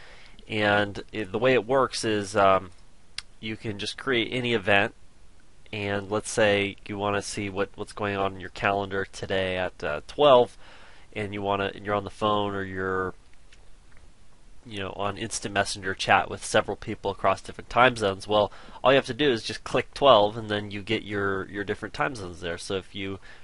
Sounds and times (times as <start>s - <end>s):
Speech: 0.5s - 2.7s, 3.4s - 5.0s, 5.7s - 10.6s, 11.2s - 13.2s, 14.7s - 23.2s.